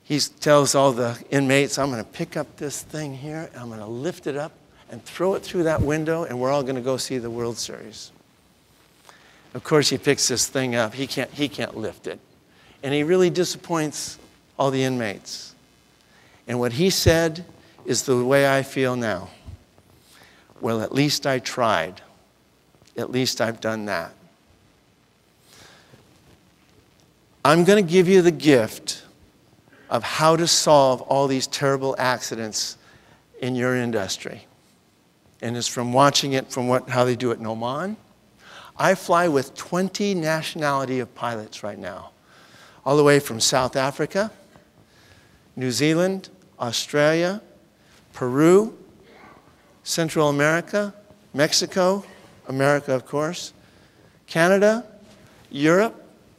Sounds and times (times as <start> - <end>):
Narration, monologue: 0.0 - 56.3
Male speech, man speaking: 0.1 - 8.2, 9.6 - 12.2, 12.8 - 15.6, 16.5 - 19.4, 20.6 - 22.1, 23.0 - 24.2, 27.5 - 29.1, 29.9 - 32.8, 33.4 - 34.5, 35.4 - 38.0, 38.8 - 42.1, 42.9 - 44.4, 45.6 - 47.5, 48.2 - 48.8, 49.8 - 53.6, 54.3 - 56.0.